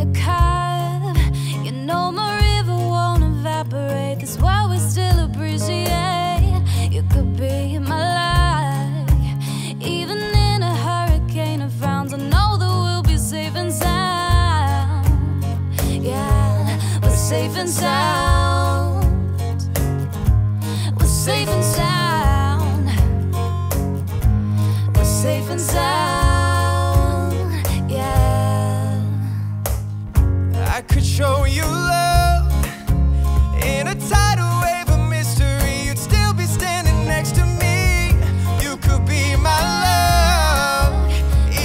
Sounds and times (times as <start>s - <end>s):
Music: 0.0s - 41.6s.